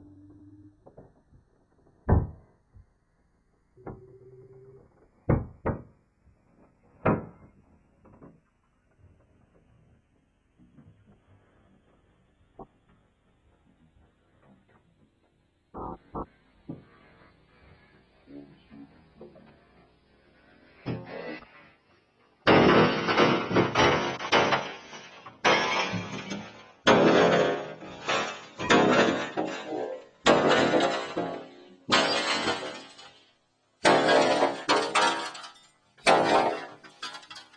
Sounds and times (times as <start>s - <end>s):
Smash, crash: 22.5s - 33.2s, 33.8s - 37.4s.